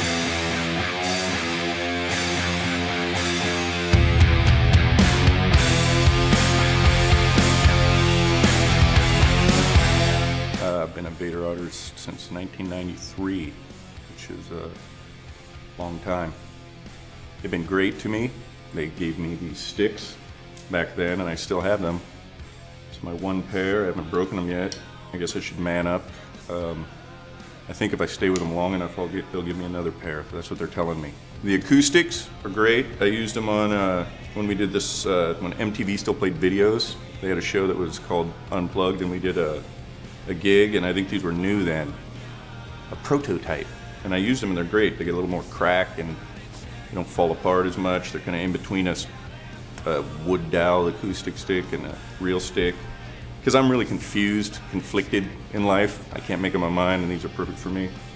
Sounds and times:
Music: 0:00.0 - 0:58.1
Speech: 0:10.6 - 0:13.6, 0:14.2 - 0:14.8, 0:15.8 - 0:16.4, 0:17.4 - 0:22.1, 0:22.9 - 0:26.9, 0:27.7 - 0:39.6, 0:40.3 - 0:42.0, 0:43.0 - 0:46.3, 0:46.9 - 0:49.1, 0:49.8 - 0:52.8, 0:53.4 - 0:58.0.

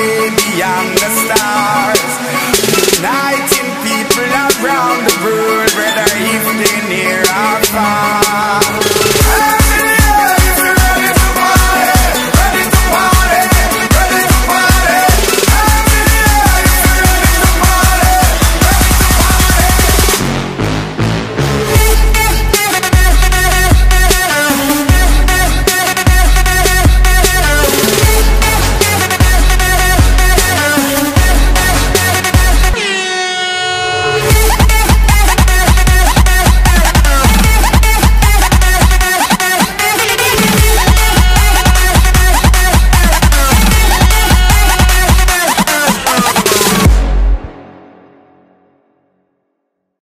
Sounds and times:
Singing: 0:00.0 - 0:20.2, 0:21.7 - 0:46.9
Music: 0:00.0 - 0:50.0.

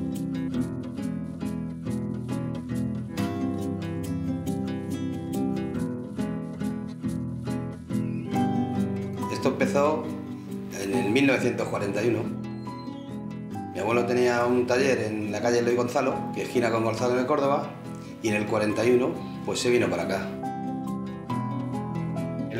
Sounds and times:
Music: 0:00.0 - 0:22.5
Speech: 0:09.3 - 0:10.1, 0:10.7 - 0:12.3, 0:13.8 - 0:20.4.

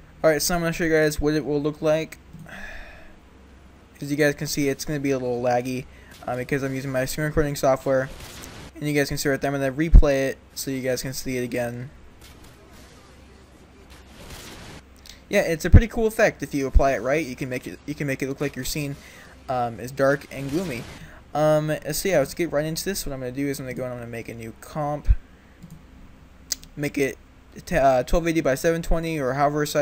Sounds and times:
Speech: 0:00.2 - 0:02.2, 0:04.0 - 0:08.1, 0:08.8 - 0:11.9, 0:15.3 - 0:25.2, 0:26.8 - 0:29.8.

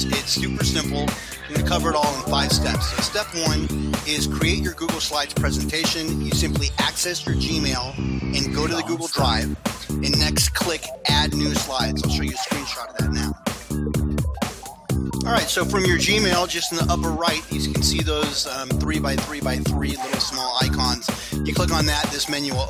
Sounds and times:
Speech: 0:00.0 - 0:13.4, 0:15.2 - 0:22.7
Background music: 0:00.0 - 0:22.7.

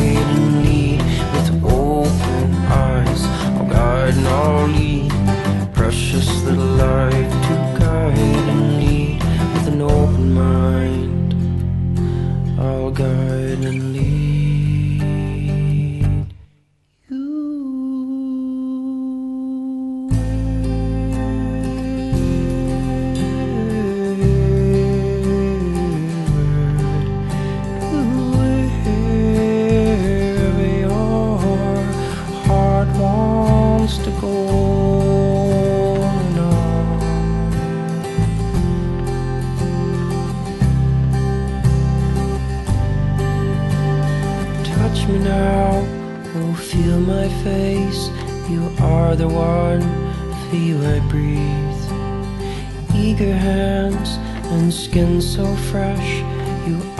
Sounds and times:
Music: 0:00.0 - 0:17.5, 0:19.6 - 0:56.9.

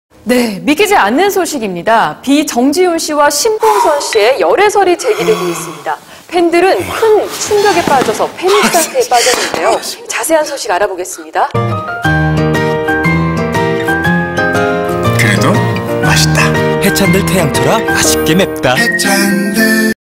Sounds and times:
Music: 0:11.5 - 0:20.0.

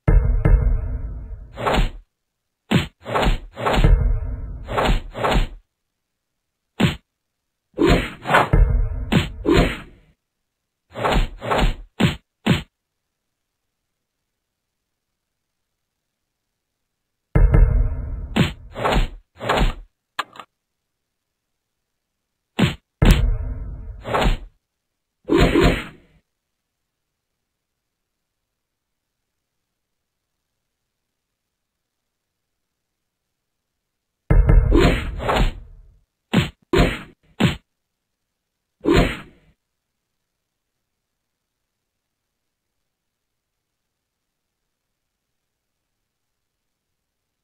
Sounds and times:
Whack, thwack: 0:01.6 - 0:02.0, 0:02.7 - 0:05.6, 0:06.8 - 0:07.1, 0:07.8 - 0:09.9, 0:11.0 - 0:12.7, 0:17.4 - 0:19.9, 0:22.6 - 0:23.4, 0:24.0 - 0:24.5, 0:25.3 - 0:26.0, 0:34.3 - 0:35.7, 0:36.3 - 0:37.6, 0:38.9 - 0:39.3.

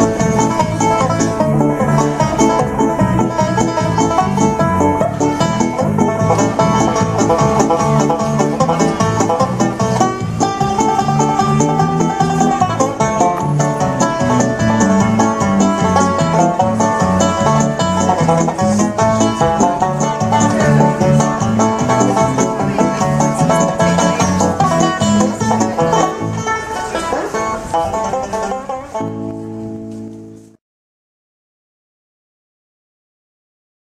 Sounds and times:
Banjo: 0:00.0 - 0:30.6
Bluegrass: 0:00.0 - 0:30.6
Speech: 0:20.4 - 0:29.0.

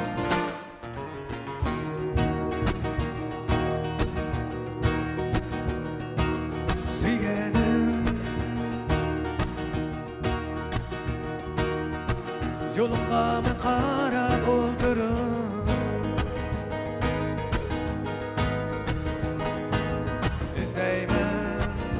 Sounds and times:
Electric guitar: 0:00.0 - 0:21.9
Strum: 0:00.0 - 0:21.9.

